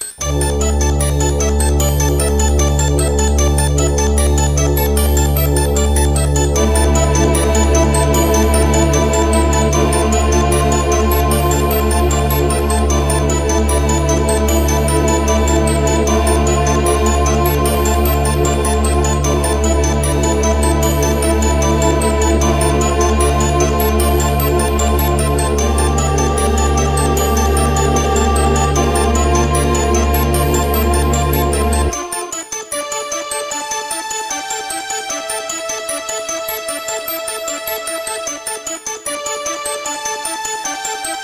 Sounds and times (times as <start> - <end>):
Music: 0.0 - 41.2.